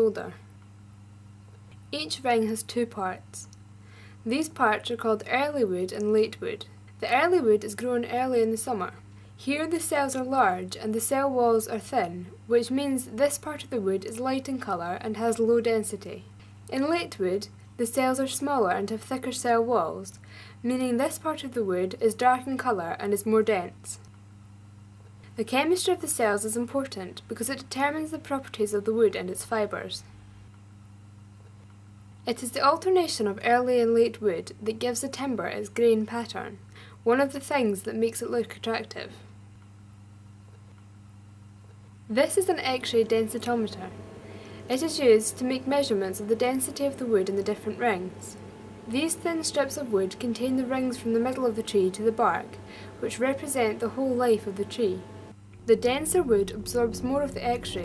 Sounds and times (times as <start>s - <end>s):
Speech: 0.0s - 0.5s, 1.9s - 3.6s, 4.2s - 24.0s, 25.4s - 30.1s, 32.3s - 39.3s, 42.1s - 44.0s, 44.6s - 55.1s, 55.7s - 57.8s.